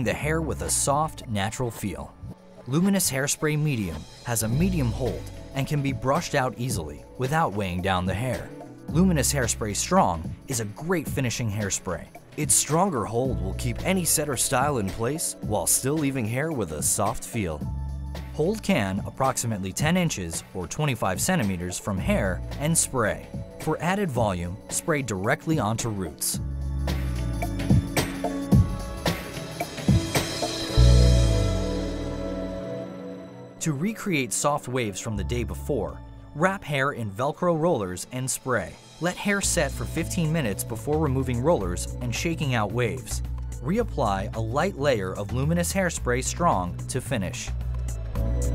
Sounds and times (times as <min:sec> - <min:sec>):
Speech: 0:00.0 - 0:17.7, 0:18.4 - 0:26.4, 0:33.6 - 0:47.6
Music: 0:00.0 - 0:48.5.